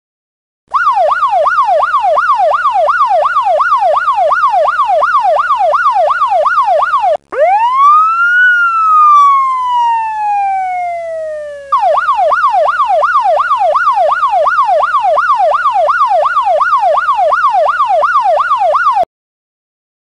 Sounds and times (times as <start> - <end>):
Police car (siren): 0.7 - 19.1.